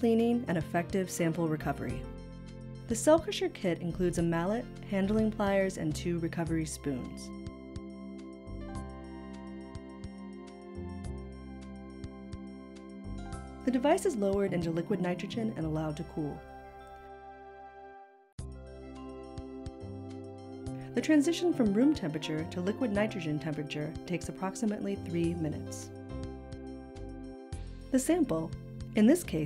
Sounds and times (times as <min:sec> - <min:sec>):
Speech: 0:00.0 - 0:02.0, 0:02.9 - 0:07.3, 0:13.7 - 0:16.4, 0:21.0 - 0:25.9, 0:28.0 - 0:29.4
Music: 0:00.0 - 0:29.4.